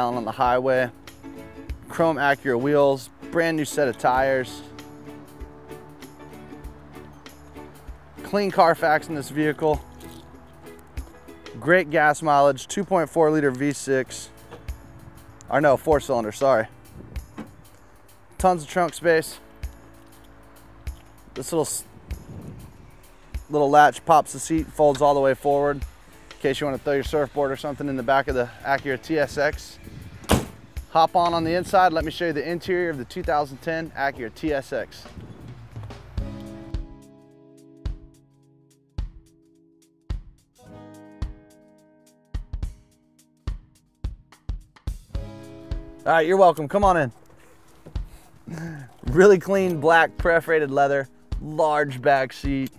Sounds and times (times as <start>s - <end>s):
Speech: 0.0s - 0.9s, 1.9s - 4.7s, 8.2s - 9.8s, 11.6s - 14.3s, 15.5s - 16.7s, 18.4s - 19.4s, 21.4s - 21.8s, 23.5s - 25.8s, 26.4s - 29.8s, 30.9s - 35.1s, 46.0s - 47.2s, 48.5s - 52.7s
Music: 0.0s - 52.7s.